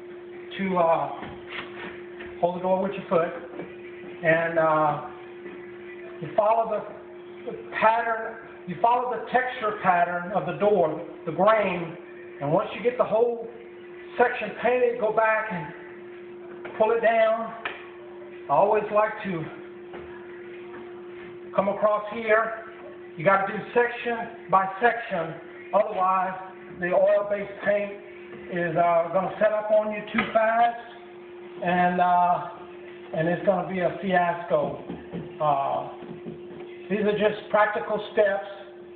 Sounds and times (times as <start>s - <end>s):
Speech: 0.5s - 1.3s, 2.4s - 3.4s, 4.2s - 5.1s, 6.2s - 6.9s, 7.5s - 13.5s, 14.1s - 15.8s, 16.8s - 17.6s, 18.5s - 19.6s, 21.6s - 31.0s, 31.6s - 34.8s, 35.4s - 36.0s, 36.9s - 38.7s.